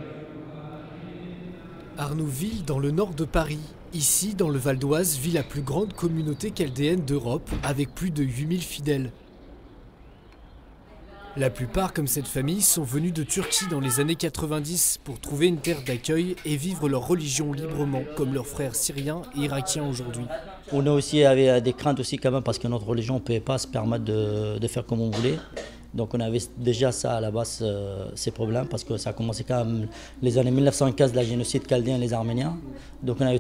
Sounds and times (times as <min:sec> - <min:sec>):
Speech: 0:11.1 - 0:33.4.